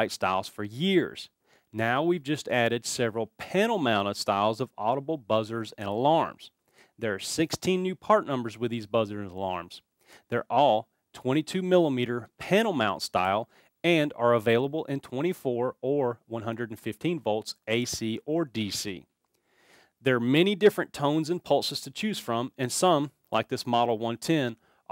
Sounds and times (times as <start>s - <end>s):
Speech: 0.0s - 19.1s, 20.0s - 24.6s.